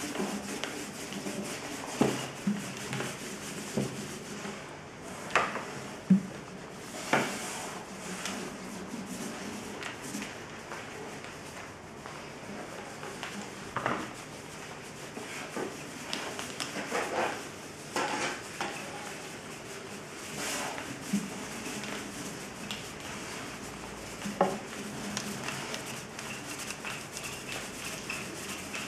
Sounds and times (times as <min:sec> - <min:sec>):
Inside, small room: 0:00.0 - 0:28.8.